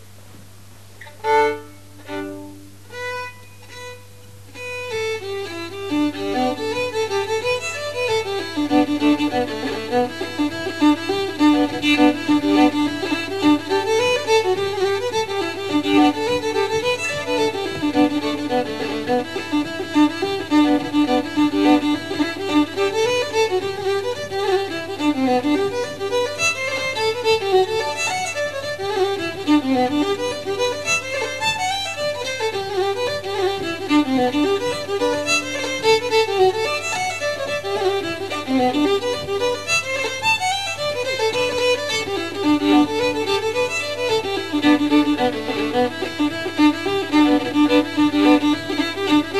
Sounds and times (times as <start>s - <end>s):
Violin, fiddle: 1.0s - 49.4s.